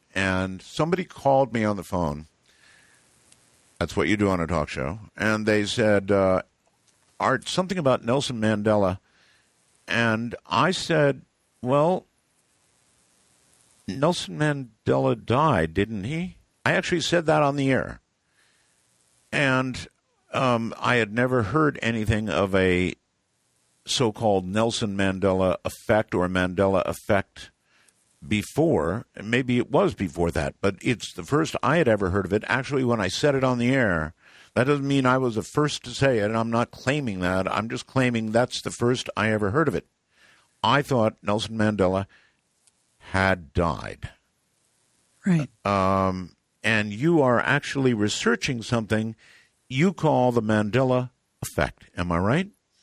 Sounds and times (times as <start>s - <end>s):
Speech: 0.1s - 2.3s, 3.8s - 6.5s, 7.2s - 9.0s, 9.9s - 12.0s, 13.9s - 18.0s, 19.4s - 23.0s, 23.9s - 27.5s, 28.2s - 39.8s, 40.6s - 42.1s, 43.0s - 44.2s, 45.3s - 52.6s.